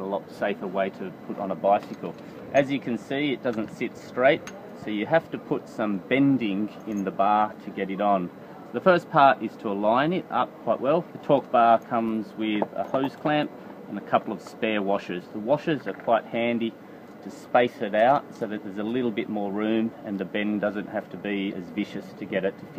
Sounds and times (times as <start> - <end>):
Speech: 0.0 - 22.7.